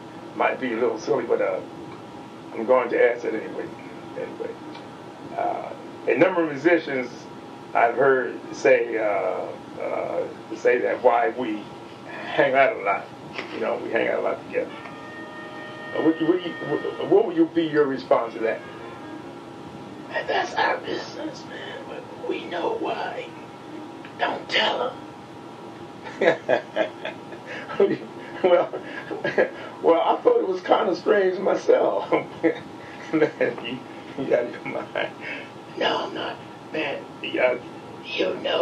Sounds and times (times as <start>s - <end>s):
Speech: 0.4s - 1.6s, 2.6s - 4.6s, 5.3s - 7.2s, 7.8s - 14.9s, 16.0s - 18.6s, 20.1s - 23.3s, 24.1s - 25.0s, 26.1s - 38.6s.